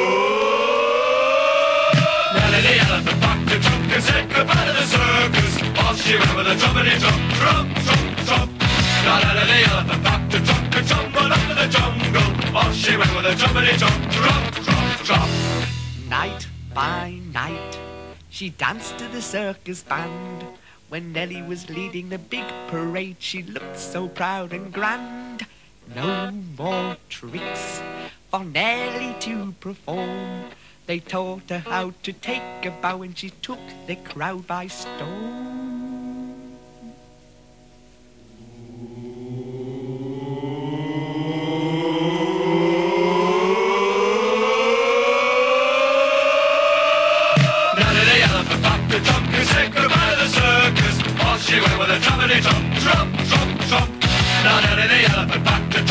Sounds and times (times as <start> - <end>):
Singing: 0.0 - 37.0, 38.4 - 55.9
Music: 1.6 - 38.3, 47.4 - 55.9.